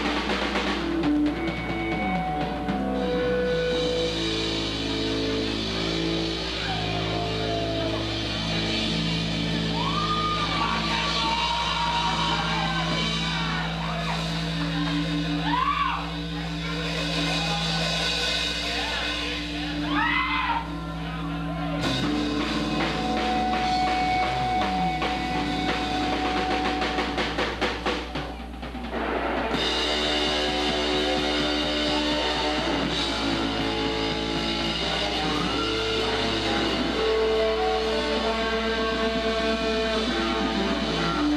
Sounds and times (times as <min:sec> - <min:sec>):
Electric guitar: 0:00.0 - 0:41.3
Speech: 0:12.4 - 0:22.0.